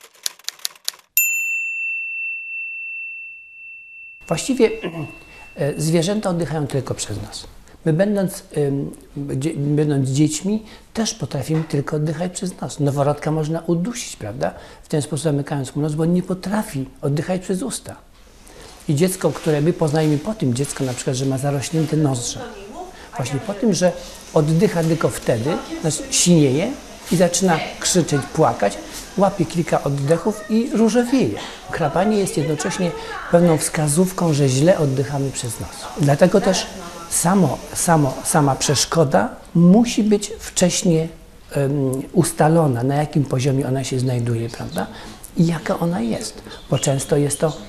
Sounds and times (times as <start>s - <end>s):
Speech: 4.3s - 18.0s, 18.9s - 47.6s.